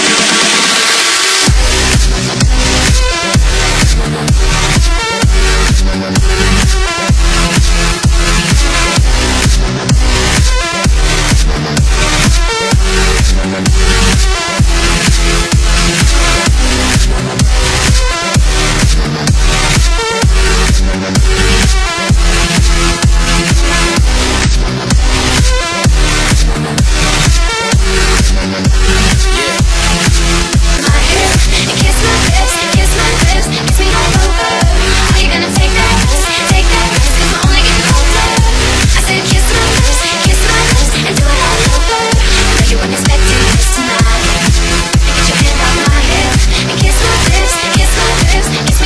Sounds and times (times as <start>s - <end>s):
Electronic dance music: 0.0s - 48.8s
Pop music: 0.0s - 48.8s.